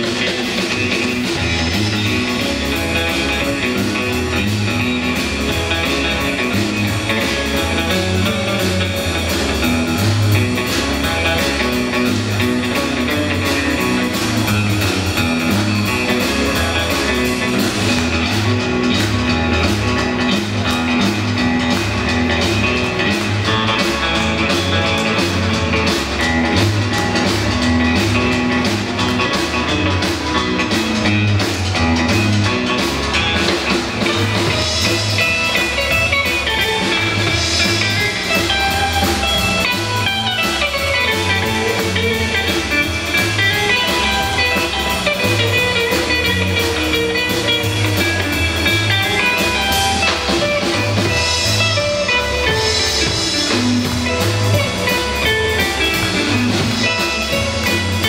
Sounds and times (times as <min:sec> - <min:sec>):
Electric guitar: 0:00.0 - 0:58.0.